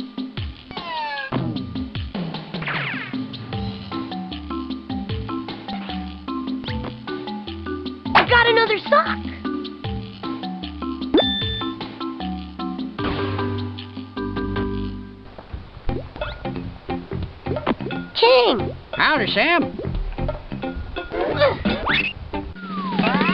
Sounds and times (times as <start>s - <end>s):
Music: 0.0s - 23.3s
Speech: 8.2s - 9.4s, 18.2s - 19.7s.